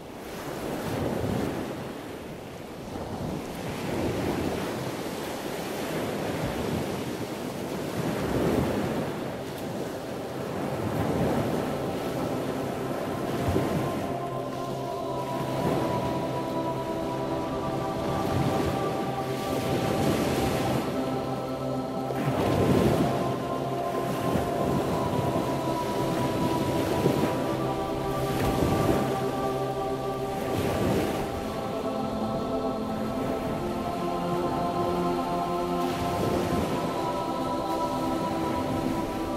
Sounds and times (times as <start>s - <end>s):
Music: 9.4s - 39.3s.